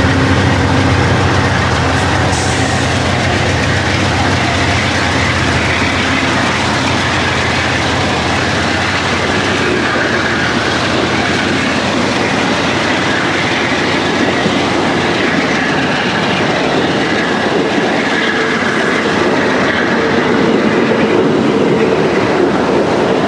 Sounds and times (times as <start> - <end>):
Railroad car, train wagon: 0.0 - 23.2
Train: 0.0 - 23.2.